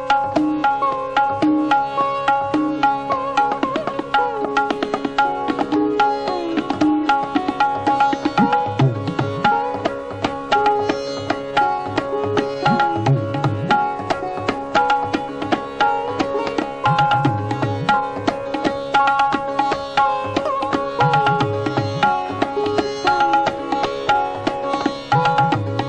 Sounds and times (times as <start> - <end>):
Sitar: 0.0 - 25.8.